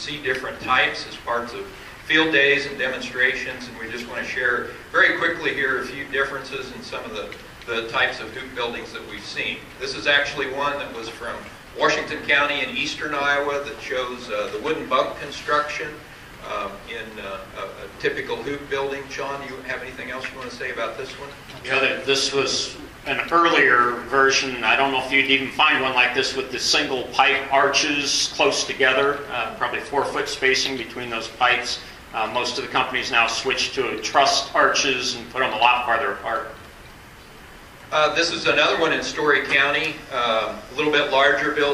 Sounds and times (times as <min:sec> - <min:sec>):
Speech: 0:00.0 - 0:36.6, 0:37.9 - 0:41.7.